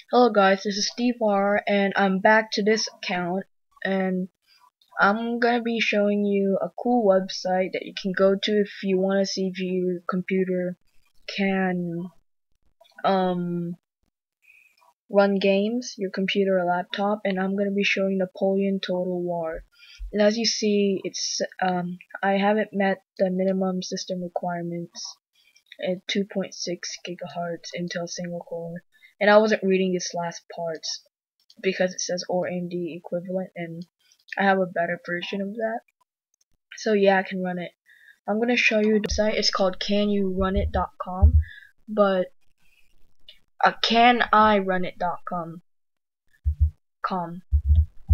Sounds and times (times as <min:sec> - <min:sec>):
Speech: 0:00.0 - 0:04.3, 0:05.0 - 0:12.2, 0:13.0 - 0:13.8, 0:15.1 - 0:25.2, 0:25.8 - 0:35.8, 0:36.7 - 0:42.3, 0:43.6 - 0:45.6, 0:47.0 - 0:47.4.